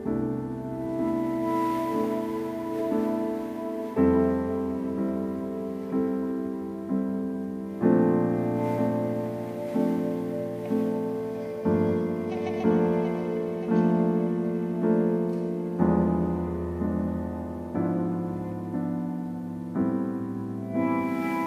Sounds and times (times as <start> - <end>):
Piano: 0.0 - 21.4.